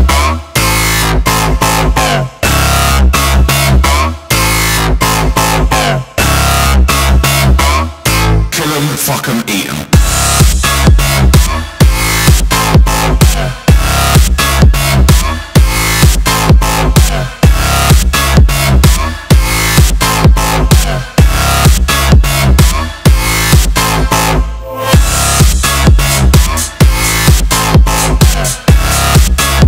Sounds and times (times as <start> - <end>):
Music: 0.0 - 29.6.